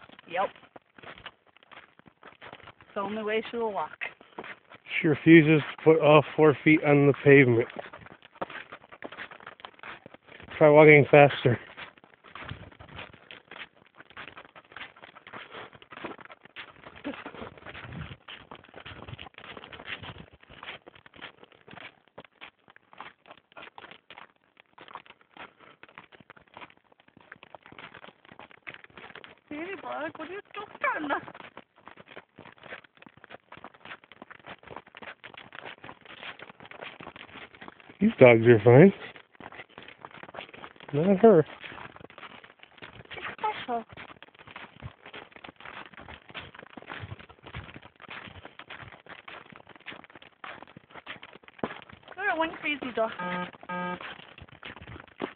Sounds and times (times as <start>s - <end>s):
Speech: 3.0s - 4.1s, 4.9s - 7.7s, 10.6s - 11.6s, 29.5s - 31.2s, 38.0s - 39.0s, 41.0s - 41.4s, 43.2s - 43.8s, 52.2s - 53.2s.